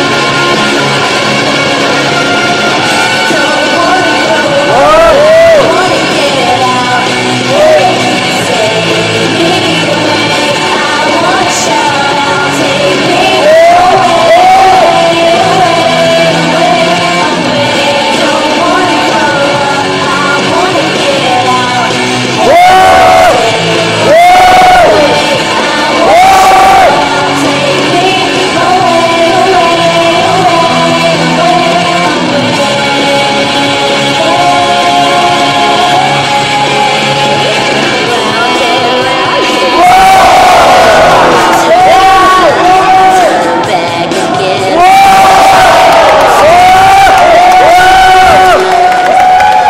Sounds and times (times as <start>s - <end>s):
Crowd: 0.0s - 49.6s.